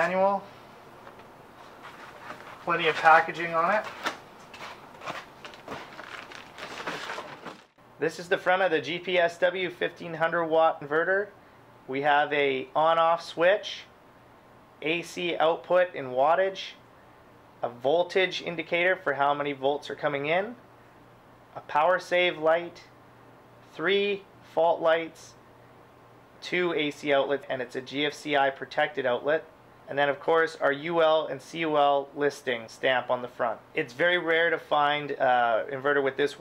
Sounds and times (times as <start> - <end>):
Speech: 0.0 - 0.5, 2.6 - 4.0, 8.0 - 13.9, 14.8 - 16.8, 17.6 - 20.6, 21.6 - 22.9, 23.7 - 25.4, 26.4 - 36.4
Inside, small room: 0.0 - 36.4.